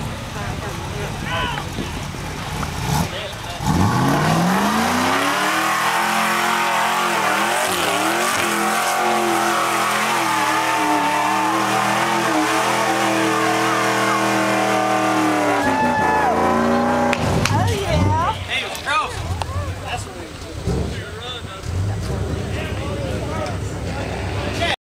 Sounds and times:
Speech: 0:00.1 - 0:02.0, 0:03.0 - 0:03.7, 0:17.5 - 0:24.8.

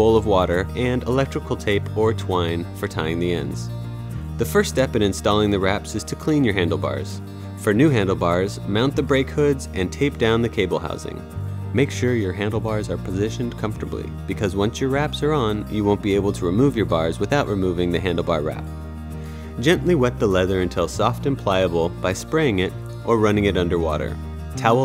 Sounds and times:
Speech: 0:00.0 - 0:03.7, 0:04.4 - 0:11.2, 0:11.8 - 0:18.7, 0:19.6 - 0:24.8
Music: 0:00.0 - 0:24.8.

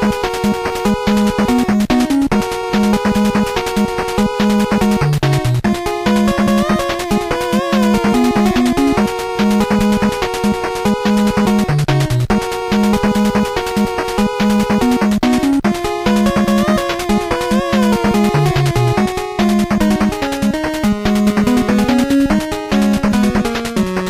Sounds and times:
Music: 0:00.0 - 0:24.1.

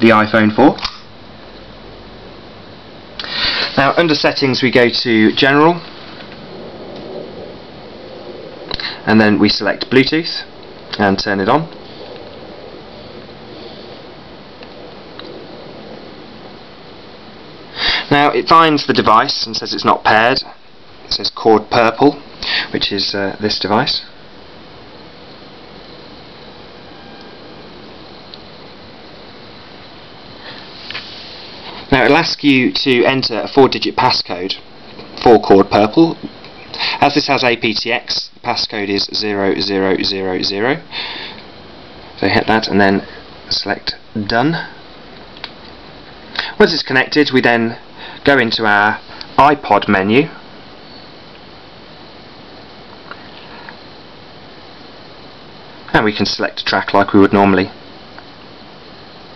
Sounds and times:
Speech: 0:00.0 - 0:01.1, 0:03.7 - 0:05.9, 0:09.0 - 0:11.8, 0:18.1 - 0:24.2, 0:31.9 - 0:36.3, 0:37.0 - 0:40.9, 0:42.2 - 0:44.8, 0:46.6 - 0:50.4, 0:55.9 - 0:57.8.

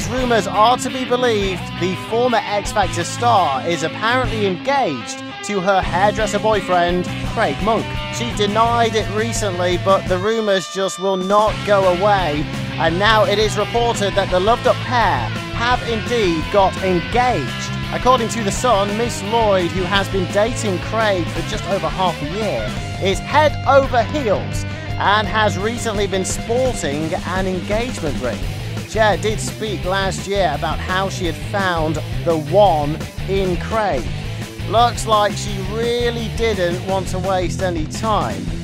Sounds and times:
Music: 0:00.0 - 0:38.6
Speech: 0:00.0 - 0:38.6.

